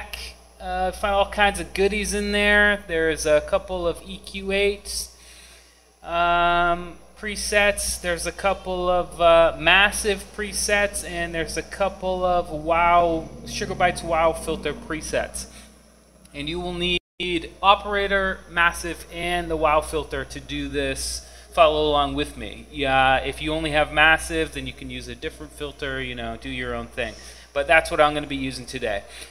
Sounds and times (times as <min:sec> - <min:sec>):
Speech: 0:00.0 - 0:05.1, 0:06.0 - 0:15.6, 0:16.3 - 0:29.2.